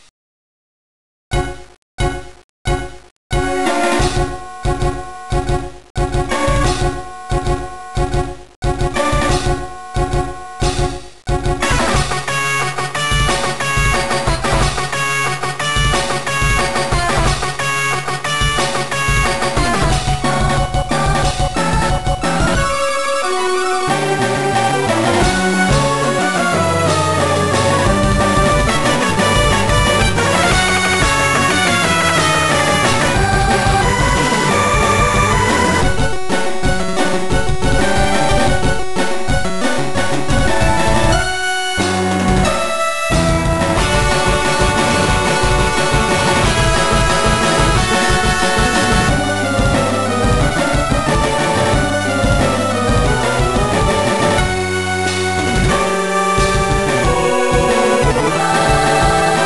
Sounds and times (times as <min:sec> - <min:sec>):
Music: 0:03.3 - 0:59.4.